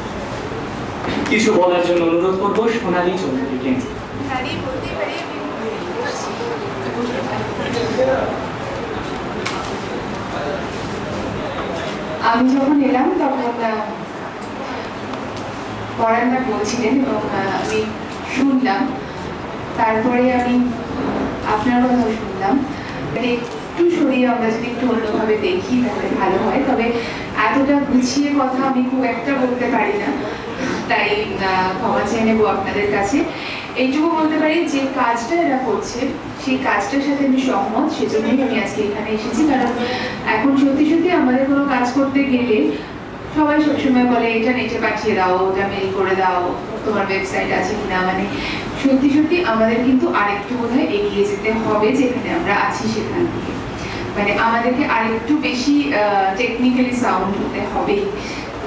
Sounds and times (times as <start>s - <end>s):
Narration, monologue: 0.0s - 58.6s
Female speech, woman speaking: 4.2s - 6.4s, 12.2s - 14.1s, 16.0s - 19.0s, 19.8s - 20.8s, 21.4s - 53.4s, 54.2s - 58.4s.